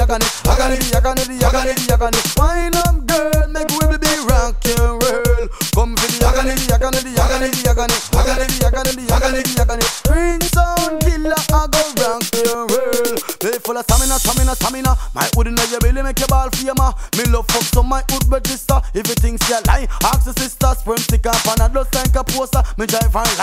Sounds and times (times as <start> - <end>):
Music: 0.0 - 23.4.